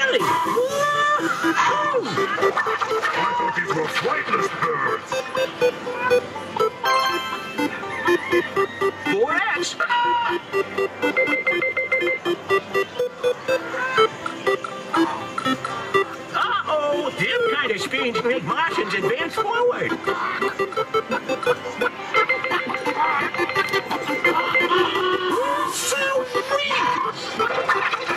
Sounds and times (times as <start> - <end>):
Music: 0.0 - 28.1.